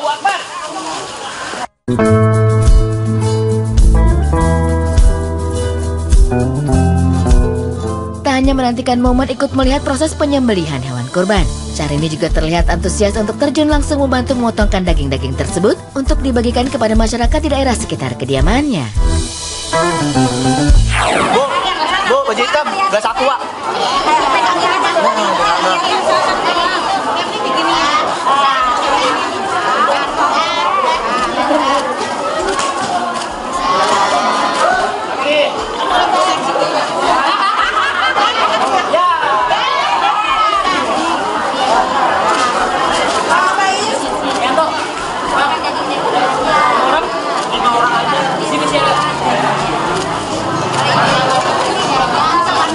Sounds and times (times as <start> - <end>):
Music: 1.9 - 21.5
Speech: 8.3 - 19.0, 38.2 - 52.7.